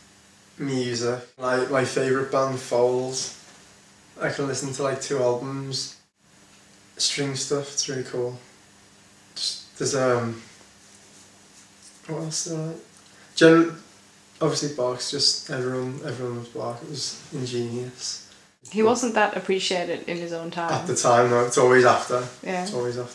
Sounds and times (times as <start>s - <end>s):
Speech: 0.6s - 3.4s, 4.2s - 6.0s, 7.0s - 8.5s, 9.4s - 10.5s, 12.1s - 12.8s, 13.4s - 13.8s, 14.4s - 23.1s.